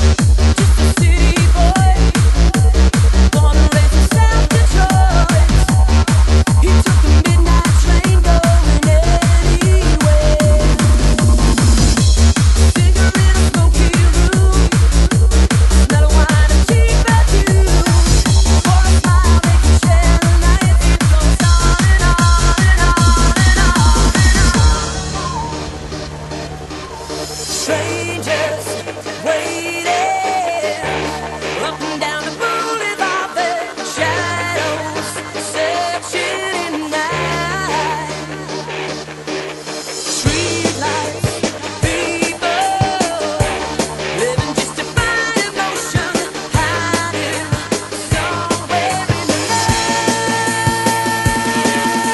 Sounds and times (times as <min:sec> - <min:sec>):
Music: 0:00.0 - 0:52.1.